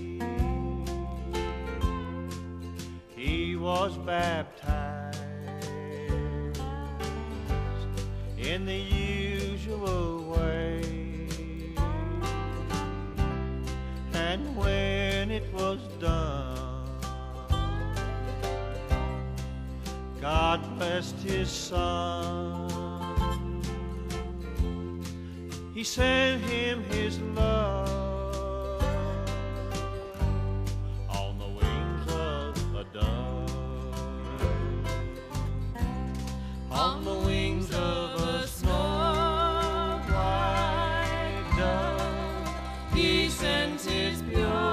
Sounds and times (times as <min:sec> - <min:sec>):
Music: 0:00.0 - 0:44.7.